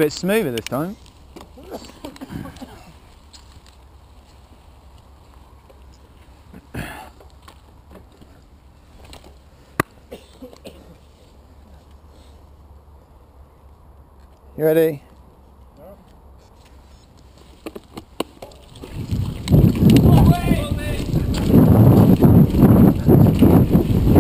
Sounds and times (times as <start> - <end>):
Speech: 20.1 - 21.5.